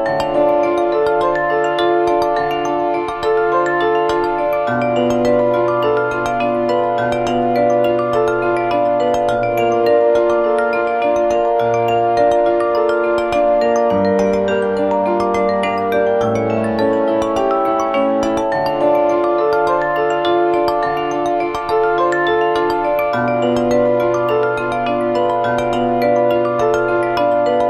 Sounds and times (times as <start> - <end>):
Music: 0.0 - 27.6.